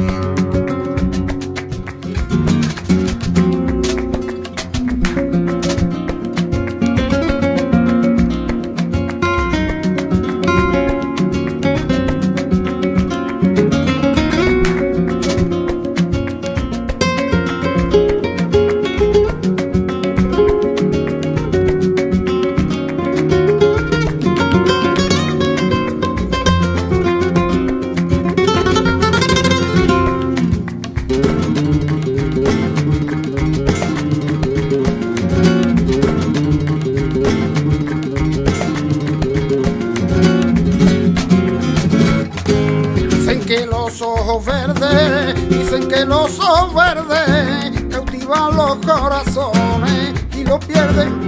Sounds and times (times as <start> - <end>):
Plucked string instrument: 0.0 - 51.2.